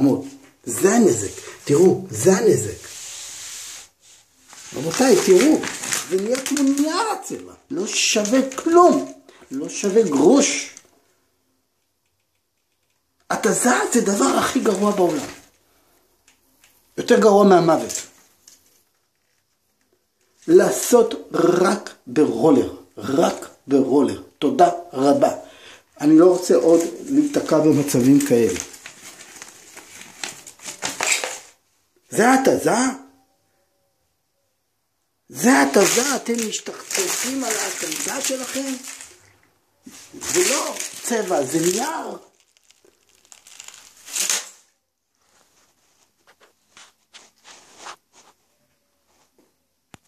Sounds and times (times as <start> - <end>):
Speech: 0.0 - 2.9, 4.7 - 10.8, 13.3 - 15.5, 17.0 - 18.2, 20.4 - 28.8, 32.0 - 33.3, 35.3 - 39.2, 39.8 - 42.4
Crumpling, crinkling: 4.4 - 11.0, 12.6 - 15.6, 17.8 - 21.0, 26.1 - 31.6, 35.4 - 48.4.